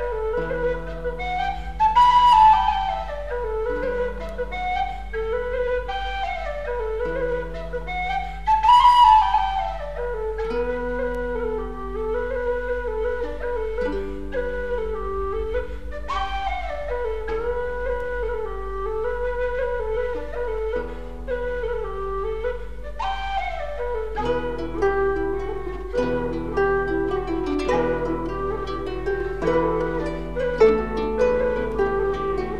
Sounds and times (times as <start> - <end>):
Flute: 0.0 - 32.5.